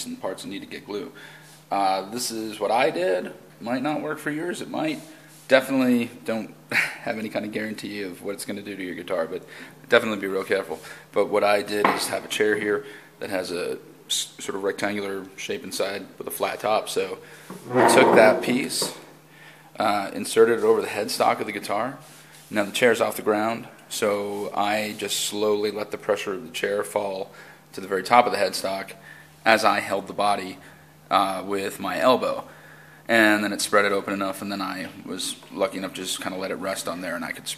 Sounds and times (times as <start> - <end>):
Speech: 0.0 - 19.1, 19.8 - 32.5, 33.1 - 37.5.